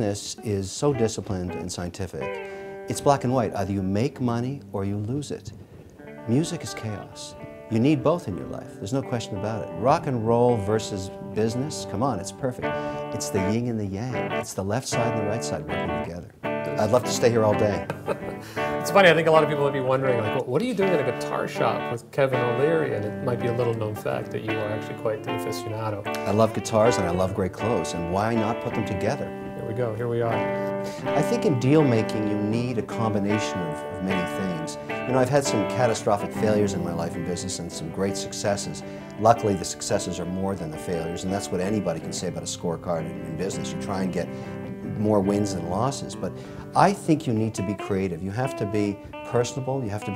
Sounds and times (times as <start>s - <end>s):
Speech: 0.0s - 5.6s, 6.3s - 30.4s, 31.0s - 50.1s
Music: 0.0s - 50.1s.